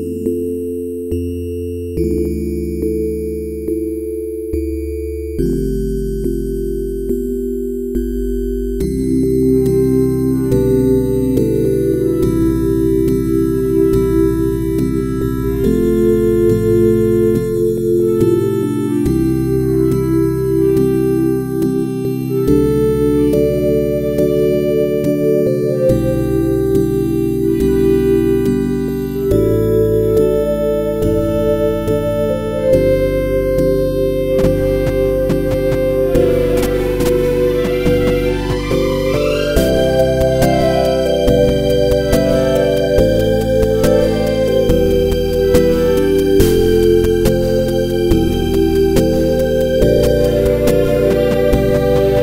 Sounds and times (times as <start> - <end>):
Music: 0.0 - 52.2.